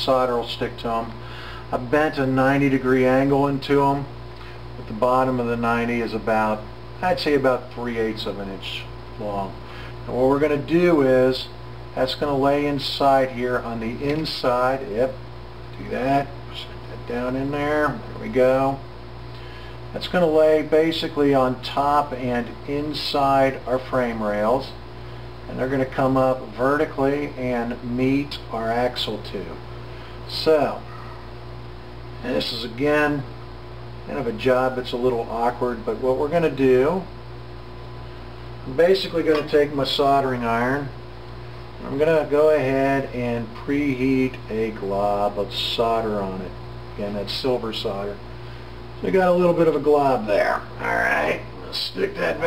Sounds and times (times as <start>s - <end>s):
Speech: 0.0s - 4.1s, 4.8s - 15.2s, 15.8s - 18.9s, 19.9s - 24.8s, 25.5s - 29.6s, 30.3s - 30.9s, 32.2s - 33.3s, 34.0s - 37.1s, 38.6s - 41.0s, 41.8s - 48.2s, 49.0s - 52.4s.